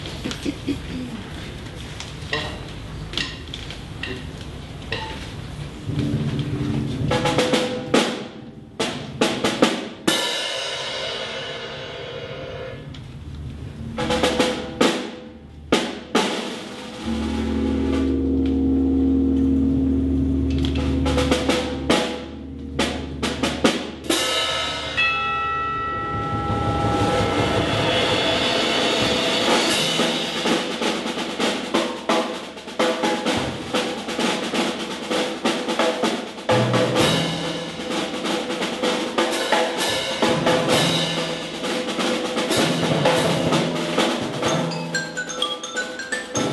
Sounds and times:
Percussion: 20.6s - 46.5s.

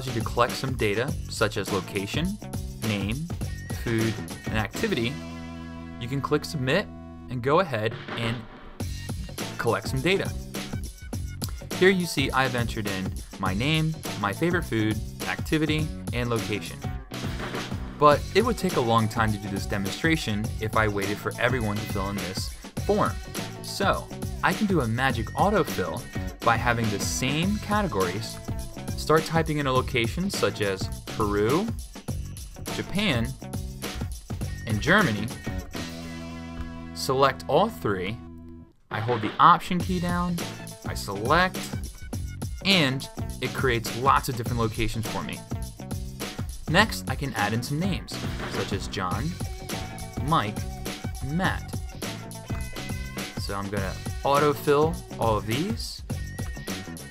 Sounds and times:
Speech: 0.0s - 5.2s, 6.0s - 8.5s, 9.5s - 10.4s, 11.7s - 16.9s, 18.0s - 28.4s, 29.0s - 31.8s, 32.7s - 33.4s, 34.6s - 35.4s, 37.0s - 38.2s, 38.9s - 41.8s, 42.6s - 45.5s, 46.7s - 49.4s, 50.2s - 50.6s, 51.2s - 51.7s, 53.4s - 56.0s
Music: 0.0s - 57.1s.

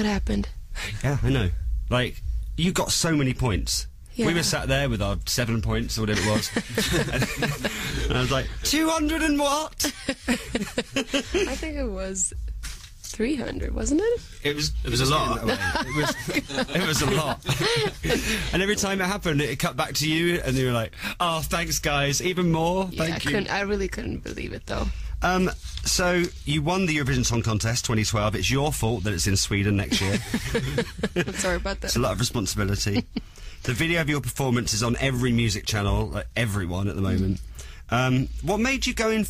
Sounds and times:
Speech: 0.0s - 6.9s, 8.0s - 9.8s, 13.1s - 30.2s, 31.3s - 33.0s, 33.7s - 39.2s.

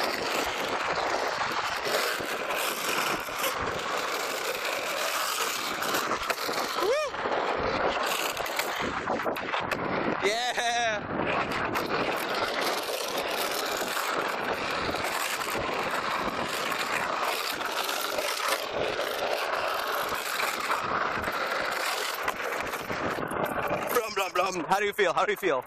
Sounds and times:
Speech: 23.9s - 25.6s.

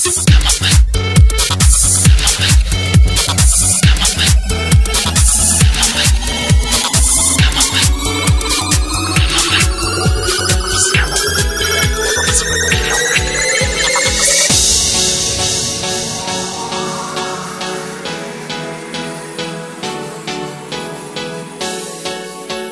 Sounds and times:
Electronica: 0.0s - 22.7s.

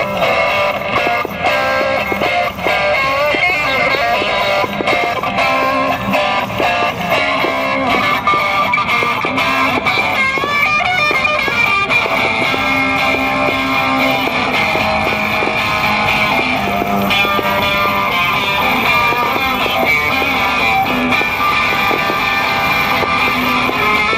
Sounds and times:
Electric guitar: 0.0s - 24.1s.

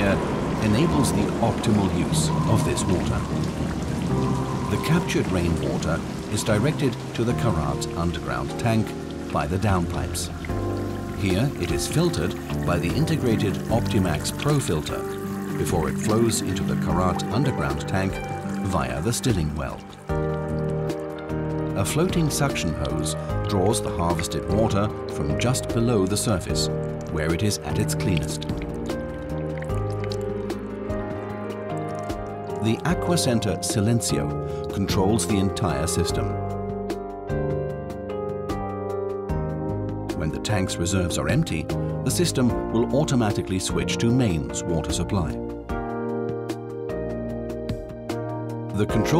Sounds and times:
Speech: 0.0s - 3.3s, 4.7s - 10.3s, 11.2s - 19.8s, 21.8s - 28.4s, 32.6s - 36.4s, 40.2s - 45.4s, 48.7s - 49.1s
Water: 0.0s - 36.4s, 40.1s - 46.0s, 48.8s - 49.1s
Music: 0.0s - 49.1s.

